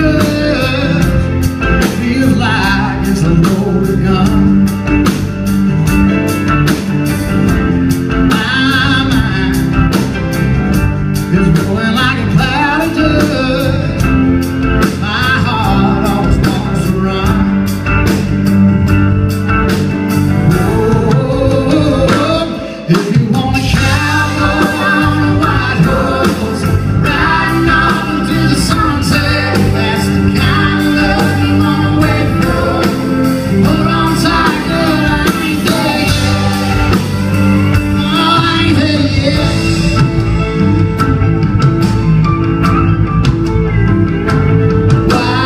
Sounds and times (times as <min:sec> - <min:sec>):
Music: 0:00.0 - 0:45.4.